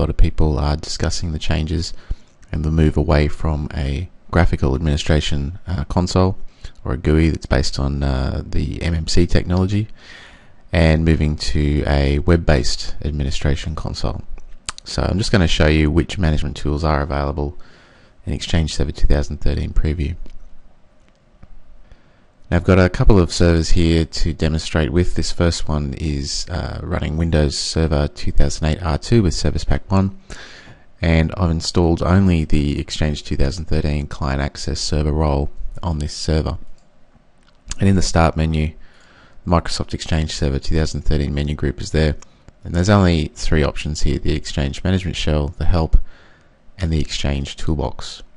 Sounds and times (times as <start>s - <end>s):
Speech: 0.0s - 10.0s, 10.7s - 17.6s, 18.2s - 20.3s, 22.5s - 30.2s, 31.0s - 36.7s, 37.7s - 38.8s, 39.4s - 46.1s, 46.8s - 48.3s.